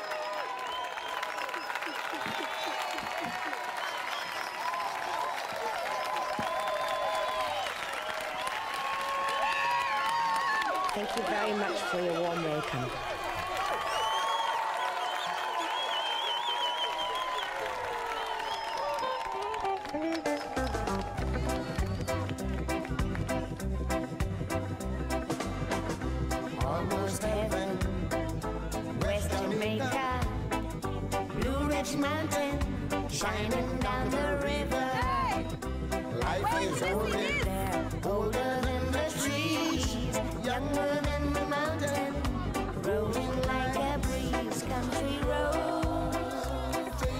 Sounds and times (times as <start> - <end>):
Music: 18.8 - 47.1
Male singing: 26.5 - 28.2, 29.0 - 30.4, 31.3 - 35.1, 36.1 - 47.1
Female singing: 29.0 - 30.3, 31.4 - 35.4, 36.2 - 47.1.